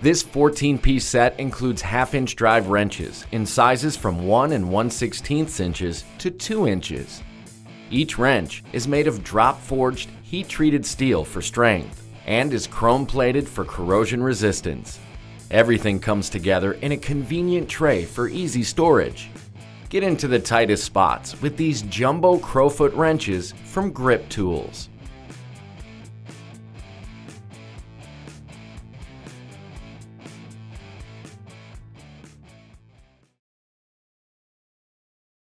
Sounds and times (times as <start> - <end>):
Speech: 0.0 - 7.2, 7.9 - 24.9
Music: 0.0 - 33.4.